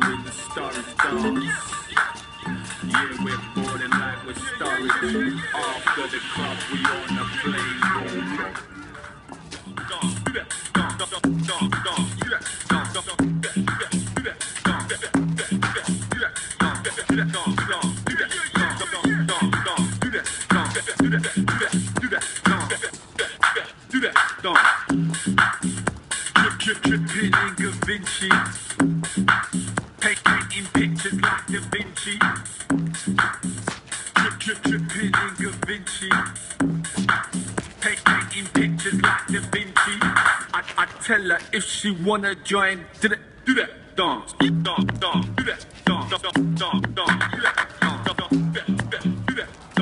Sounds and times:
Music: 0:00.0 - 0:41.0, 0:44.3 - 0:49.8
Shuffle: 0:00.0 - 0:42.0, 0:44.4 - 0:49.8.

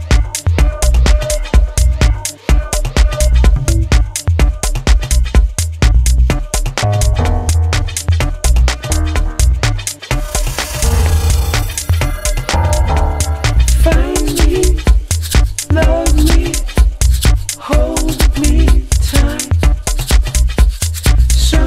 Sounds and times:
Music: 0:00.0 - 0:21.6.

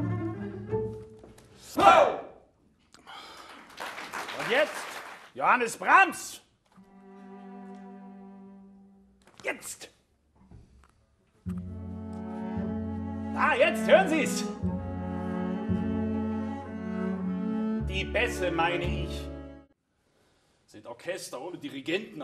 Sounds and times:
Classical music: 0:00.0 - 0:01.6, 0:06.7 - 0:09.2, 0:11.4 - 0:19.8
Speech: 0:04.4 - 0:06.5, 0:09.4 - 0:10.0, 0:13.4 - 0:14.6, 0:17.9 - 0:19.3, 0:20.7 - 0:22.2
Cello: 0:06.8 - 0:09.0, 0:11.4 - 0:19.8.

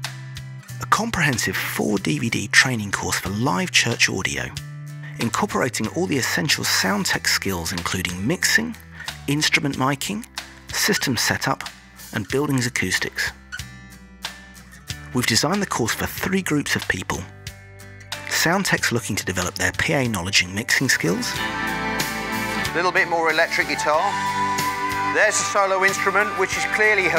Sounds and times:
Music: 0:00.0 - 0:27.1
Speech: 0:00.8 - 0:13.4, 0:15.1 - 0:17.3, 0:18.3 - 0:21.4, 0:22.8 - 0:24.1, 0:25.2 - 0:27.1.

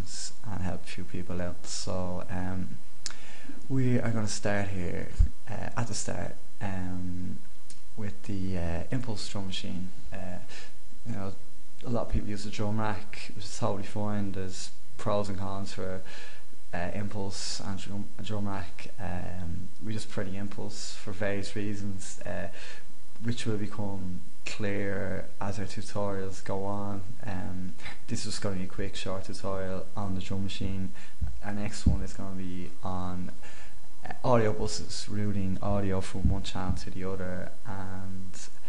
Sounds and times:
Speech: 0:00.0 - 0:02.8, 0:03.7 - 0:07.4, 0:08.0 - 0:16.1, 0:16.7 - 0:33.4, 0:34.0 - 0:38.6.

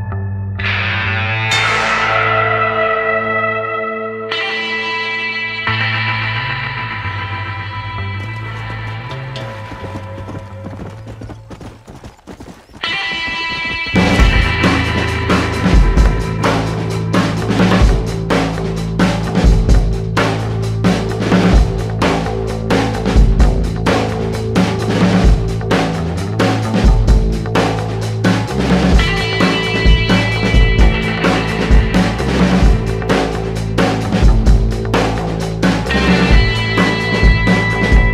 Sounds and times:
Music: 0:00.0 - 0:11.4, 0:12.8 - 0:38.1
Clip-clop: 0:08.0 - 0:14.2.

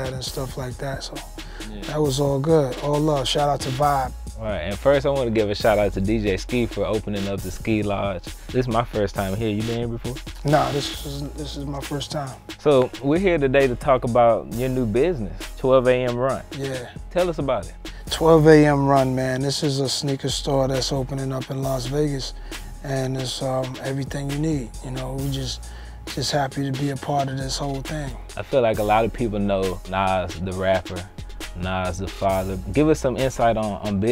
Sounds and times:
Music: 0:00.0 - 0:34.1
Speech: 0:00.0 - 0:34.1.

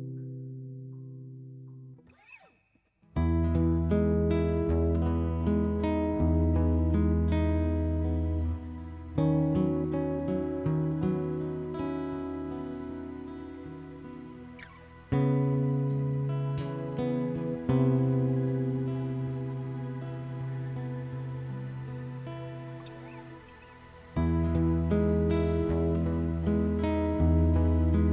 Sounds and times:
Music: 0:00.0 - 0:28.1.

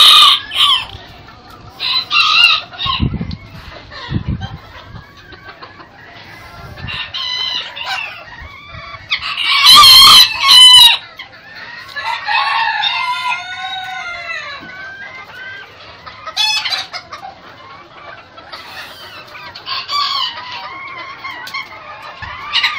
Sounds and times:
Crowing, cock-a-doodle-doo: 0:00.0 - 0:00.9, 0:06.9 - 0:08.1, 0:09.2 - 0:11.0, 0:12.0 - 0:14.6
Cluck: 0:00.0 - 0:22.7.

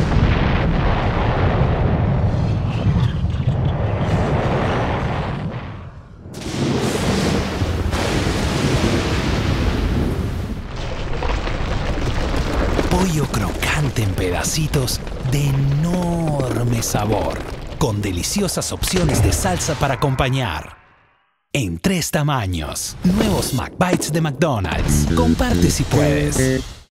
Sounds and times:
Speech: 0:12.9 - 0:20.8, 0:21.6 - 0:26.7
Music: 0:24.8 - 0:26.9.

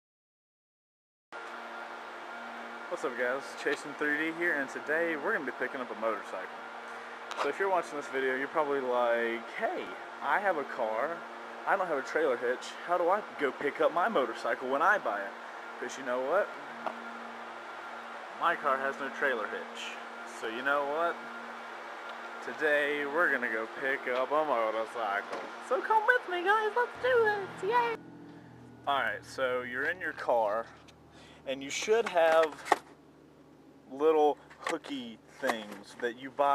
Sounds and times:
Speech: 0:02.9 - 0:06.5, 0:07.4 - 0:16.6, 0:18.4 - 0:21.2, 0:22.4 - 0:28.0, 0:28.9 - 0:30.8, 0:31.4 - 0:32.6, 0:33.9 - 0:36.5.

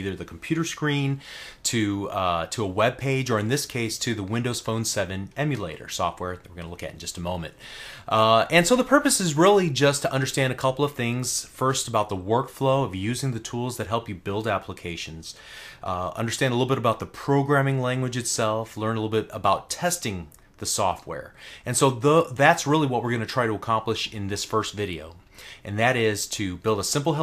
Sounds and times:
Speech: 0:00.0 - 0:27.2.

